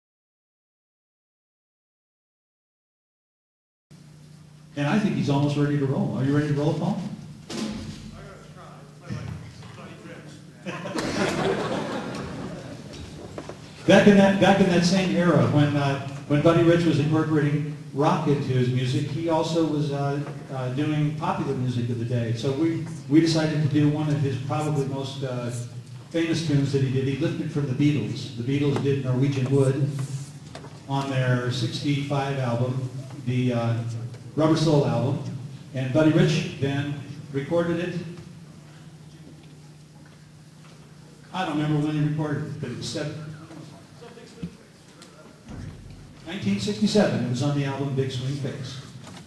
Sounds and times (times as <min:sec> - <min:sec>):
Speech: 0:04.8 - 0:07.2, 0:08.1 - 0:11.0, 0:13.8 - 0:30.0, 0:30.9 - 0:38.2, 0:41.3 - 0:45.6, 0:46.2 - 0:49.0.